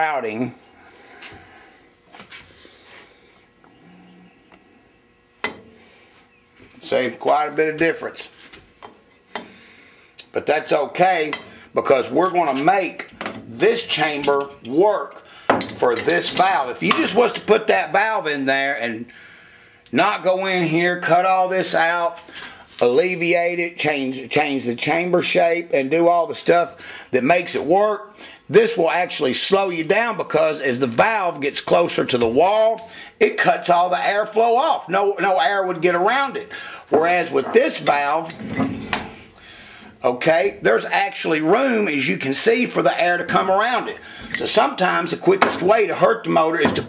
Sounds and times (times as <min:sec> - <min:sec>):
Speech: 0:00.0 - 0:00.6, 0:06.8 - 0:08.4, 0:10.2 - 0:15.2, 0:15.8 - 0:19.1, 0:19.9 - 0:22.2, 0:22.8 - 0:38.3, 0:40.0 - 0:46.8.